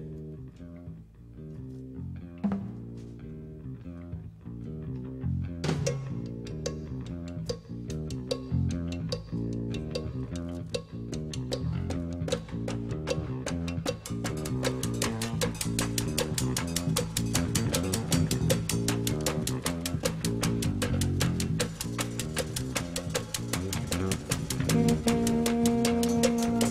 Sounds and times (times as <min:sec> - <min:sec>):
Drum: 0:02.4 - 0:03.0, 0:05.6 - 0:26.7
Drum kit: 0:02.4 - 0:03.2, 0:05.6 - 0:26.7.